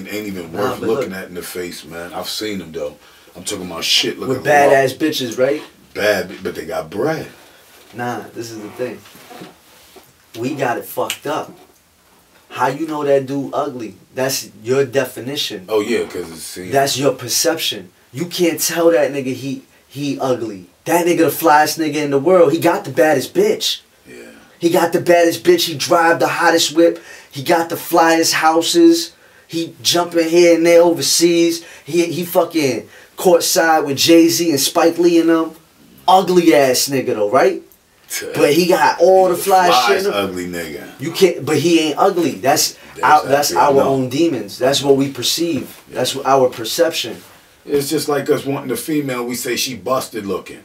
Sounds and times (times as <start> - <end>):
Male speech, man speaking: 0.0 - 9.1, 10.3 - 11.7, 12.5 - 50.6
Conversation: 0.0 - 50.6.